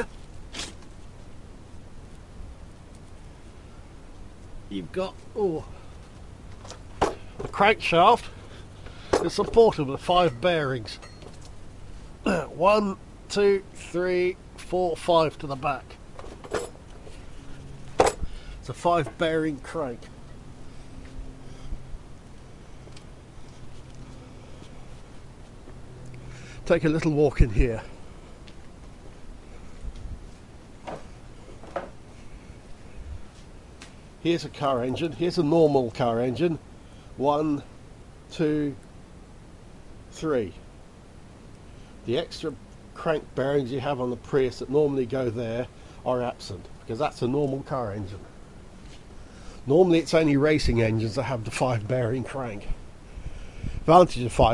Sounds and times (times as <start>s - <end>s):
Speech: 4.7s - 5.8s, 7.4s - 8.3s, 9.2s - 11.0s, 12.3s - 16.0s, 18.6s - 20.1s, 26.7s - 28.0s, 34.2s - 36.6s, 37.2s - 37.7s, 38.3s - 38.8s, 40.1s - 40.6s, 42.0s - 48.3s, 49.7s - 52.8s, 53.8s - 54.5s.